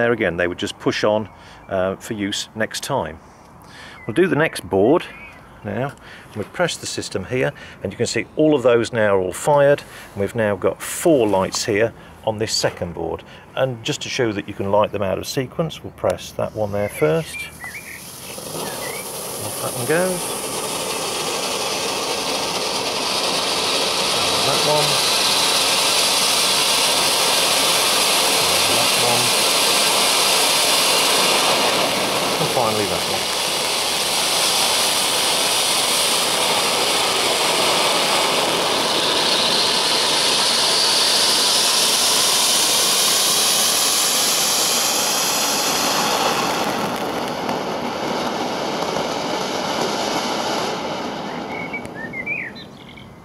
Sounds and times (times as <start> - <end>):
Speech: 0.0 - 3.2, 4.1 - 17.6, 19.4 - 20.3, 24.2 - 25.0, 28.4 - 29.4, 32.4 - 33.3
Fireworks: 17.0 - 52.2.